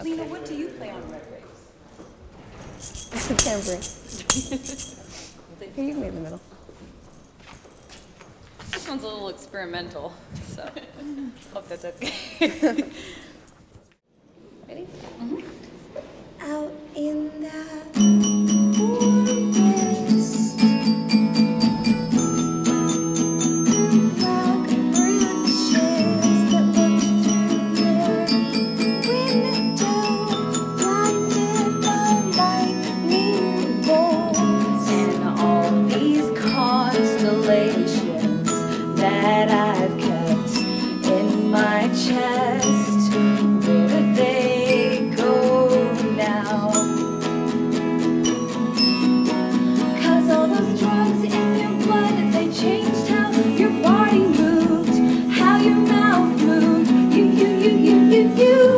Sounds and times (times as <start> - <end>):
Speech: 5.5 - 6.4, 11.5 - 12.1, 14.7 - 15.6.